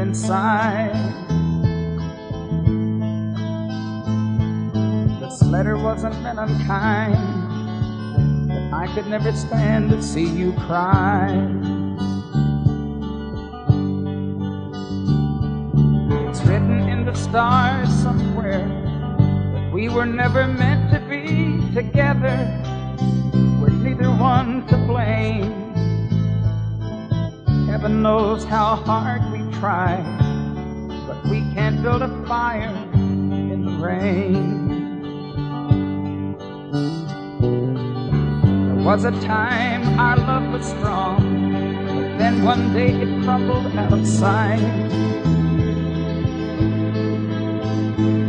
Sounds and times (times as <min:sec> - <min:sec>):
Music: 0:00.0 - 0:48.2.